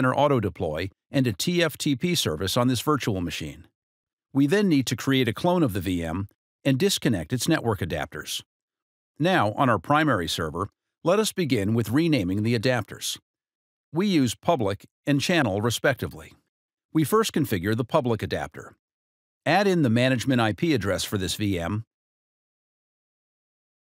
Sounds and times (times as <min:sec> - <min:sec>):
Speech: 0:00.0 - 0:03.7, 0:04.4 - 0:08.5, 0:09.2 - 0:13.2, 0:14.0 - 0:16.4, 0:17.0 - 0:18.8, 0:19.5 - 0:21.9.